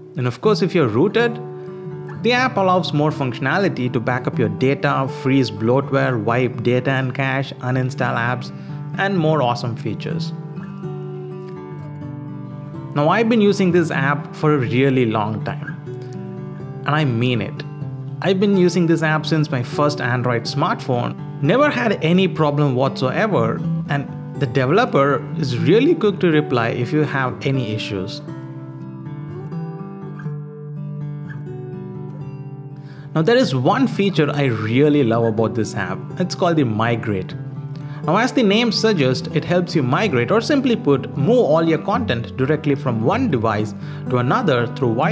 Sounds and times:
Acoustic guitar: 0:00.0 - 0:45.1.

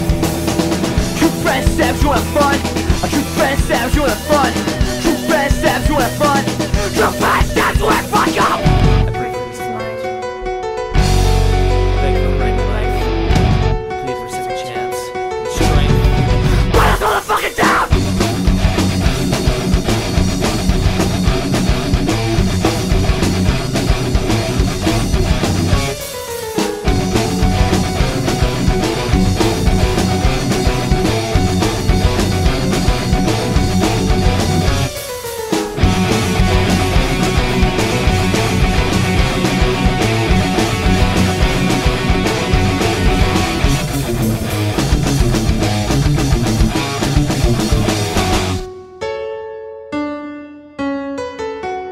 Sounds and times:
Heavy metal: 0:00.0 - 0:14.4, 0:15.1 - 0:48.7.

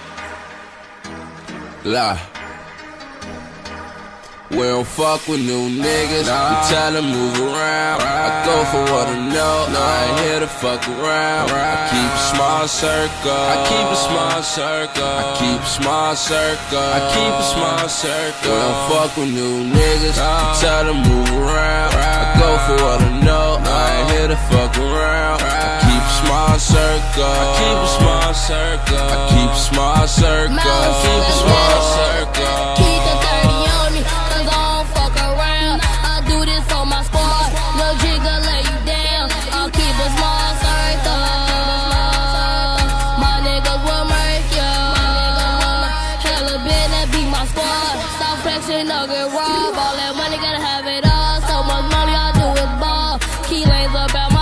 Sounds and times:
Music: 0:00.0 - 0:54.4.

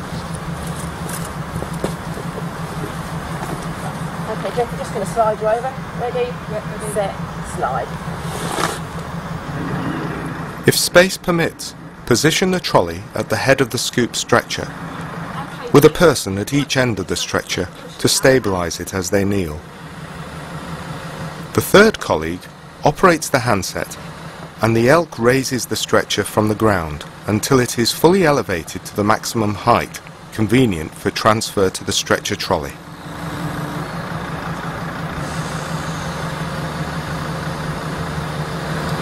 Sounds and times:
Vehicle: 0:00.0 - 0:39.0
Speech: 0:04.3 - 0:07.9, 0:10.7 - 0:14.7, 0:15.4 - 0:19.6, 0:21.6 - 0:24.0, 0:24.6 - 0:32.8.

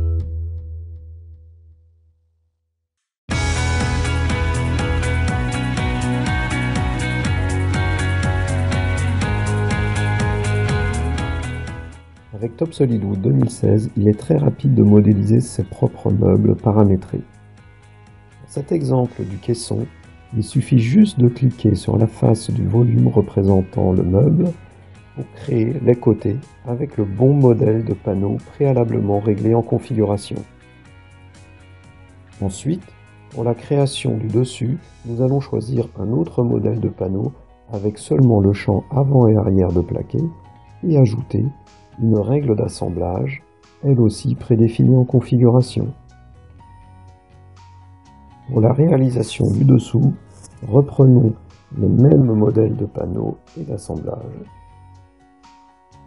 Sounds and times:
Music: 0:00.0 - 0:01.9, 0:03.3 - 0:56.0
Speech: 0:12.4 - 0:17.3, 0:18.4 - 0:24.6, 0:25.2 - 0:30.5, 0:32.4 - 0:46.0, 0:48.5 - 0:54.5.

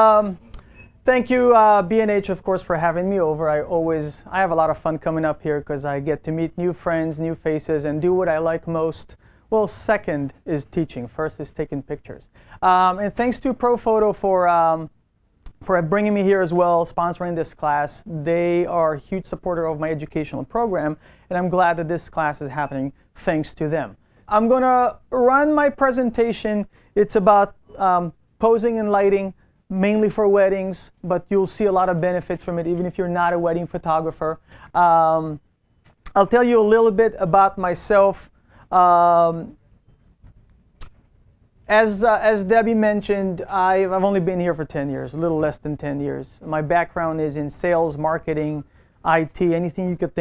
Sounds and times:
Speech: 0:00.0 - 0:00.4, 0:01.0 - 0:14.9, 0:15.5 - 0:35.4, 0:36.1 - 0:39.6, 0:41.7 - 0:50.2.

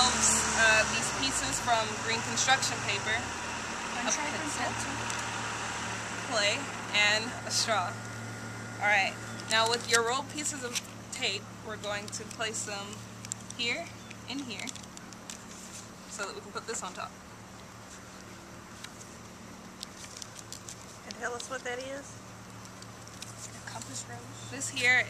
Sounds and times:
Speech: 0:13.6 - 0:14.7, 0:21.1 - 0:22.1, 0:23.7 - 0:25.0.

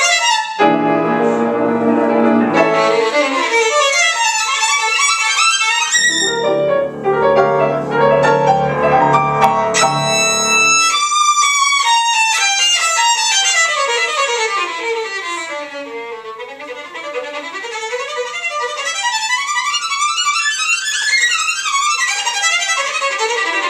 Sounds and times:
Violin, fiddle: 0:00.0 - 0:23.6.

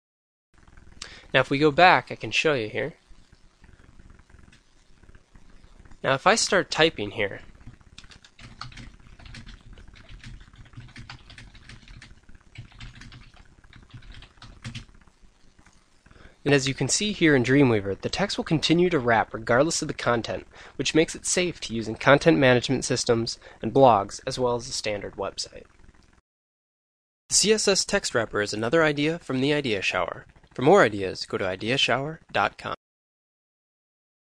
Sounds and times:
Inside, small room: 0:00.6 - 0:26.2, 0:27.3 - 0:32.8
Speech: 0:01.3 - 0:03.0, 0:06.0 - 0:07.5, 0:16.4 - 0:25.6, 0:27.3 - 0:32.8.

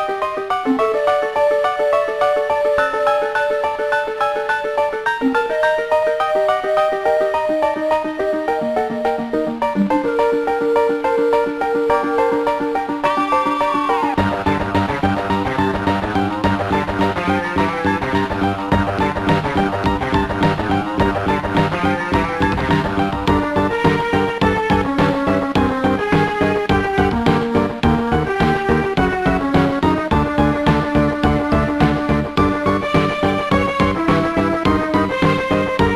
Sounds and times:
Video game music: 0:00.0 - 0:35.9.

